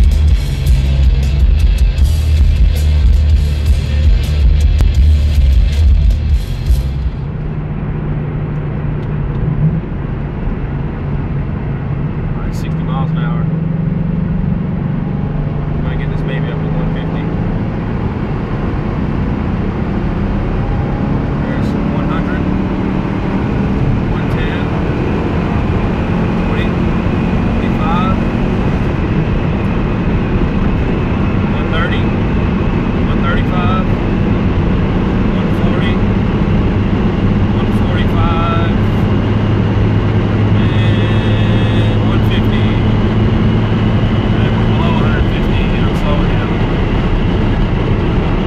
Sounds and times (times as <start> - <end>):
Speech: 12.4 - 13.5, 15.8 - 17.3, 21.4 - 22.5, 24.1 - 24.7, 26.5 - 26.8, 27.6 - 28.3, 31.6 - 32.1, 33.1 - 34.0, 35.4 - 36.0, 37.6 - 39.0, 40.6 - 42.9, 44.4 - 46.6.